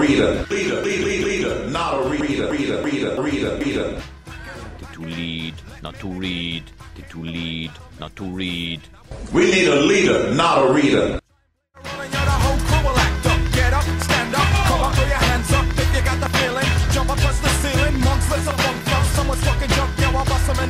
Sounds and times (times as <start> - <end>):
Speech: 0.0 - 4.0, 4.8 - 11.2
Music: 0.0 - 9.3, 11.2 - 20.6.